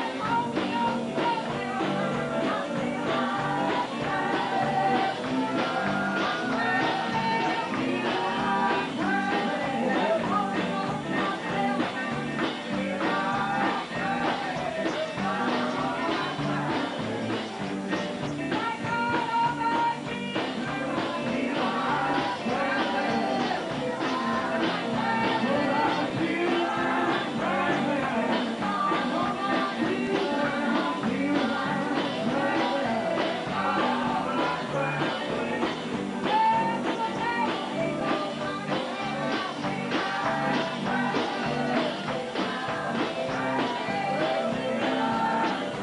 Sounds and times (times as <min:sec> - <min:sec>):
Female singing: 0:00.0 - 0:17.4, 0:18.5 - 0:45.8
Choir: 0:00.0 - 0:17.9, 0:18.6 - 0:45.8.